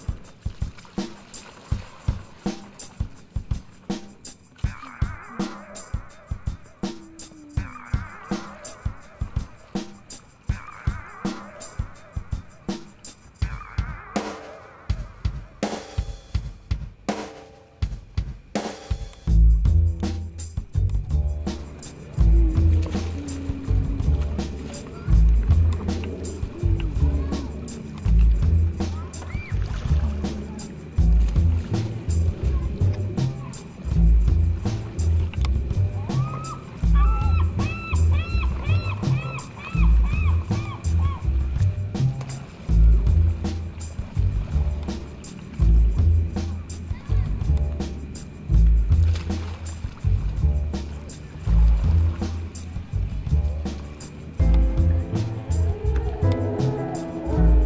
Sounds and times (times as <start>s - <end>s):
Boat, Water vehicle: 0.0s - 57.6s
Music: 0.0s - 57.6s.